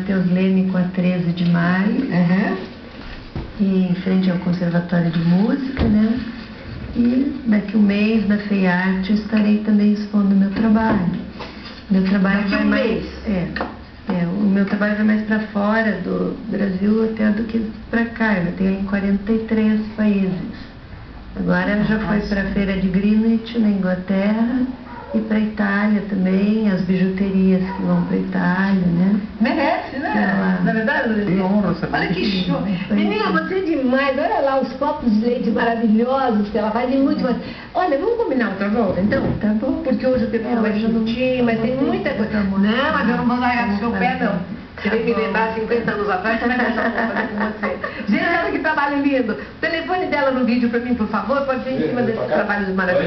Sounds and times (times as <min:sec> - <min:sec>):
Speech: 0:11.9 - 0:20.5, 0:21.4 - 0:53.0.